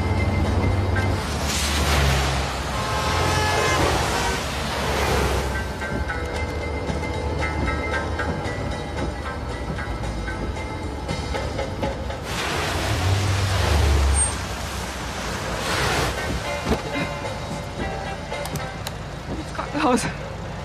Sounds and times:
Music: 0.0s - 2.1s, 3.4s - 14.2s, 15.7s - 20.6s.

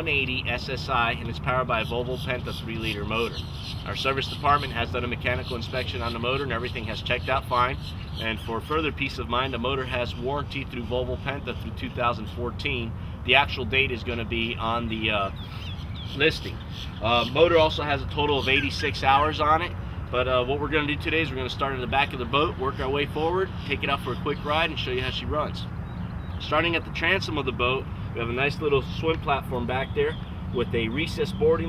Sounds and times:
Speech: 0.0s - 15.4s, 16.2s - 25.7s, 26.4s - 31.6s.

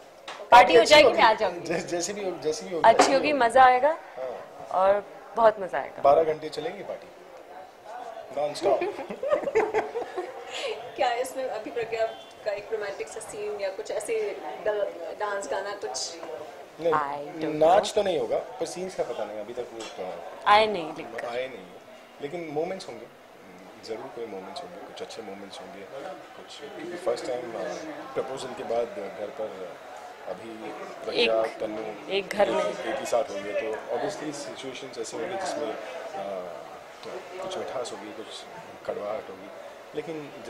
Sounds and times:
Snicker: 8.8s - 10.8s.

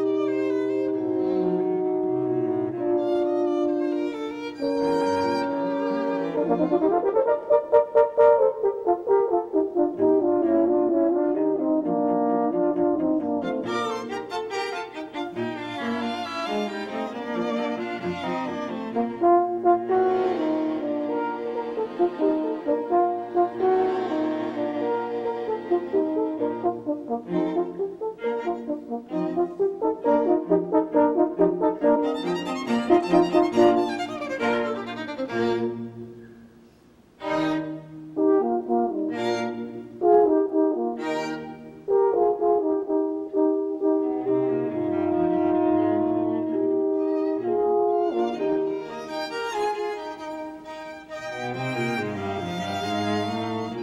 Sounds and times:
French horn: 0.0s - 53.8s.

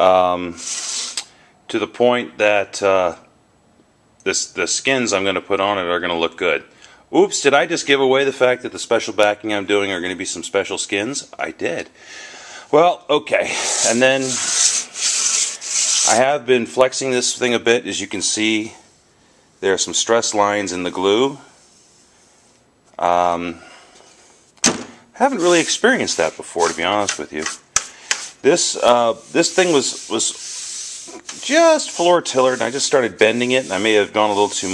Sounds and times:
Speech: 0.0s - 0.6s, 1.7s - 3.3s, 4.2s - 11.9s, 12.7s - 14.5s, 16.0s - 18.8s, 19.6s - 21.5s, 23.0s - 23.6s, 25.2s - 27.6s, 28.4s - 30.4s, 31.2s - 34.7s
Inside, small room: 0.0s - 34.7s.

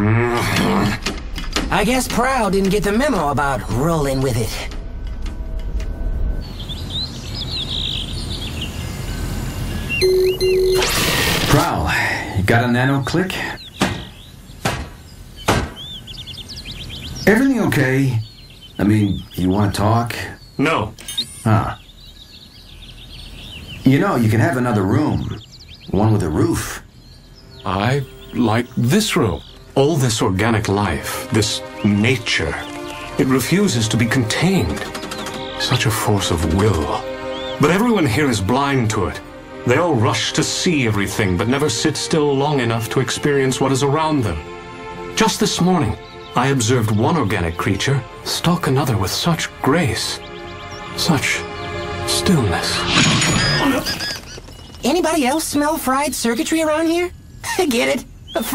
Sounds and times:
Environmental noise: 0.0s - 58.5s
Speech: 1.7s - 4.7s, 23.9s - 26.8s
Bird vocalization, bird call, bird song: 6.2s - 58.5s.

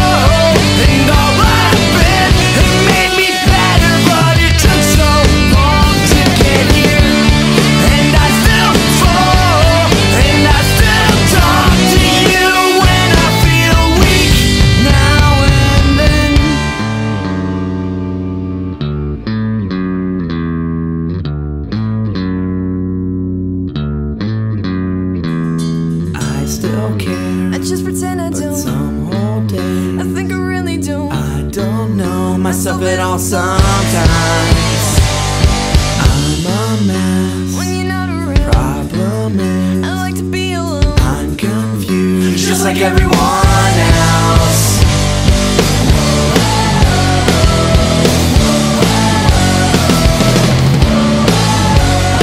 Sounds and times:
Bass guitar: 0.0s - 52.2s.

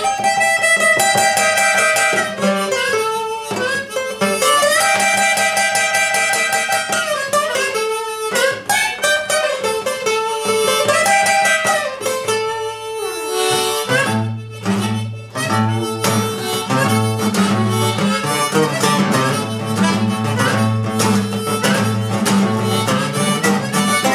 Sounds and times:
Harmonica: 0.0s - 24.1s
Wind instrument, woodwind instrument: 0.0s - 24.1s.

